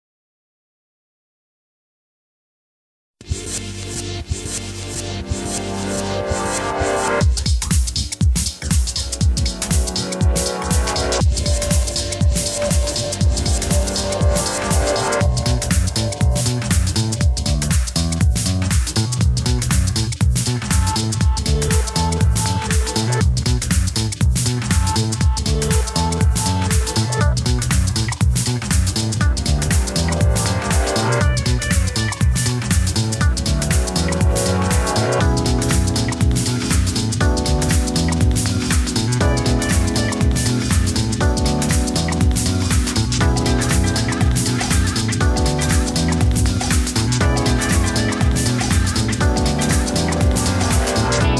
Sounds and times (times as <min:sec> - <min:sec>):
Music: 0:03.2 - 0:51.3.